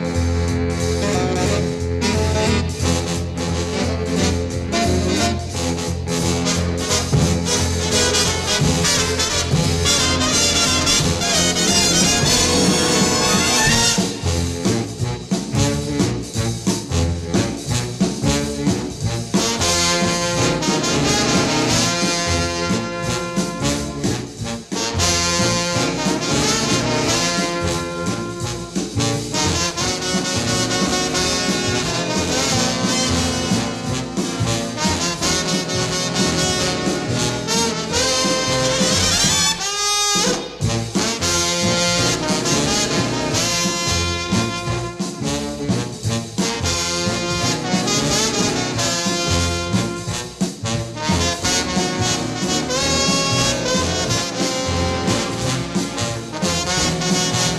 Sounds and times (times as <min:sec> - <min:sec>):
Music: 0:00.0 - 0:57.5.